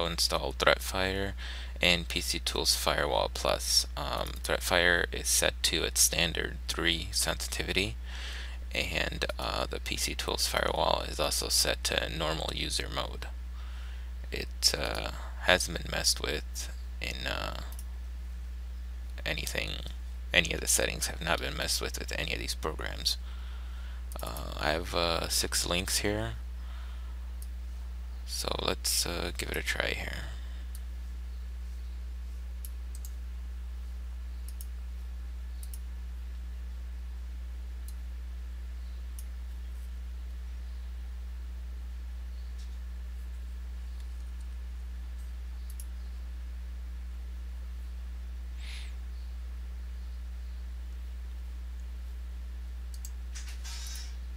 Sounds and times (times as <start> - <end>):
Speech: 0.0 - 8.0, 8.7 - 13.3, 14.3 - 17.8, 19.2 - 23.2, 24.2 - 26.4, 28.3 - 30.4.